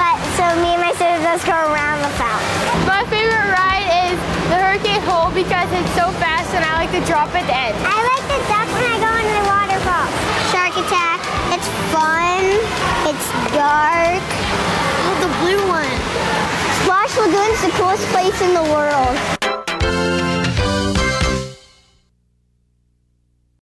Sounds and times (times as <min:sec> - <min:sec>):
Speech: 0:00.0 - 0:14.4, 0:16.8 - 0:19.2
Music: 0:00.0 - 0:22.1.